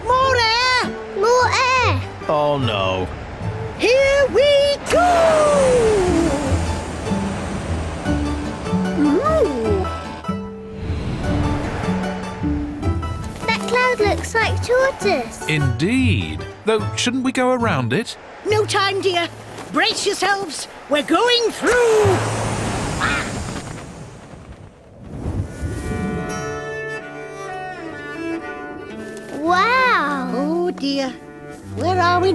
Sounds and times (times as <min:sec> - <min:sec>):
Music: 0:00.0 - 0:19.2, 0:25.6 - 0:32.3.